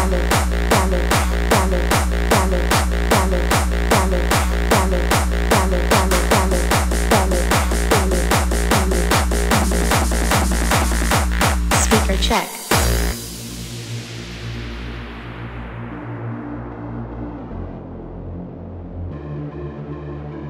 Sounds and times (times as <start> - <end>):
Techno: 0.0 - 17.8.